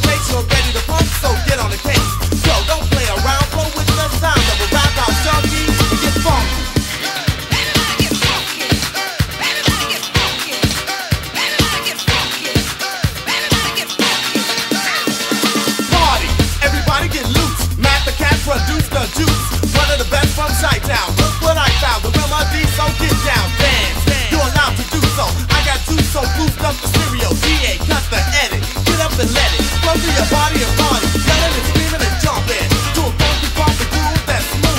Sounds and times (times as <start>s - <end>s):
Disco: 0.0s - 34.7s.